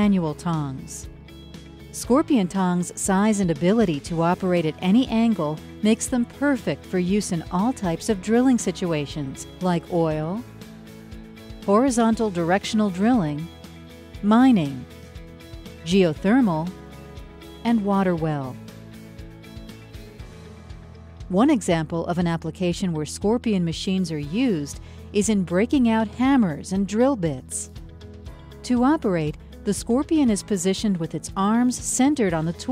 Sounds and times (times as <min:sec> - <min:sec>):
Speech: 0:00.0 - 0:01.1, 0:02.0 - 0:10.4, 0:11.7 - 0:13.5, 0:14.2 - 0:14.9, 0:15.9 - 0:16.7, 0:17.6 - 0:18.6, 0:21.3 - 0:27.7, 0:28.7 - 0:32.7
Music: 0:00.0 - 0:32.7.